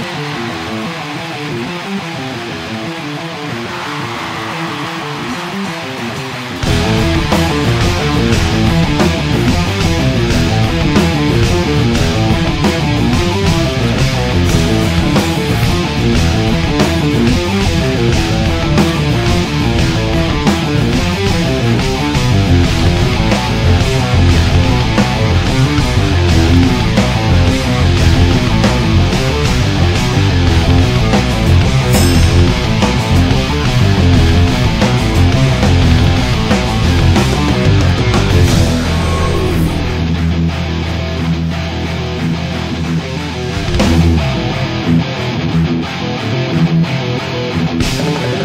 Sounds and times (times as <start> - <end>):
Bass guitar: 0.0 - 48.4
Strum: 19.4 - 42.2.